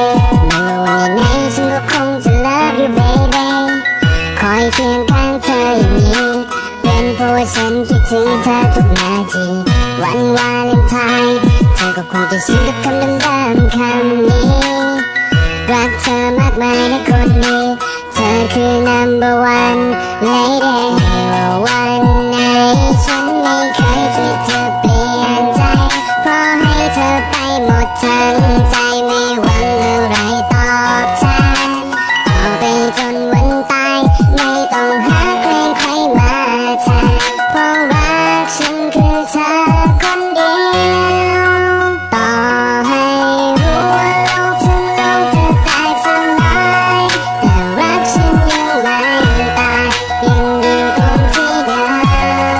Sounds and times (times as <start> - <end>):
Music: 0.0 - 52.5.